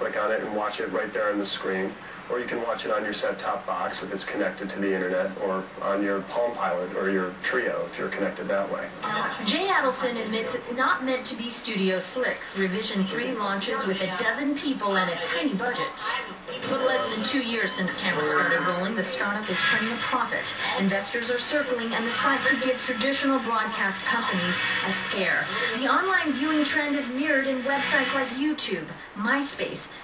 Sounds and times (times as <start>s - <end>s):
Speech: 0.0s - 30.0s.